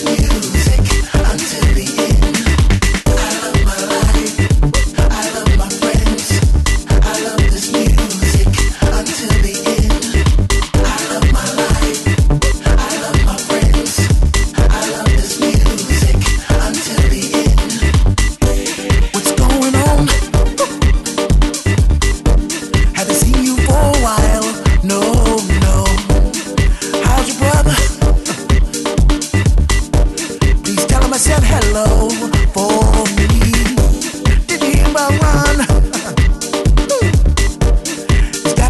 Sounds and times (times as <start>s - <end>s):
Exciting music: 0.0s - 38.6s.